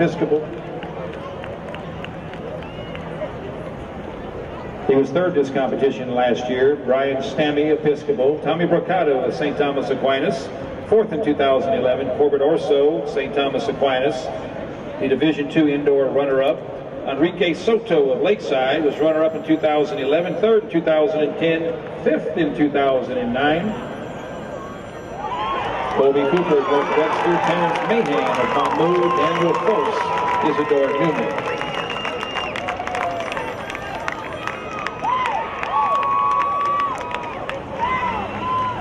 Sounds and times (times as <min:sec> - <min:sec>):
Speech: 0:00.0 - 0:00.5, 0:04.9 - 0:14.4, 0:15.0 - 0:23.8, 0:26.0 - 0:31.4.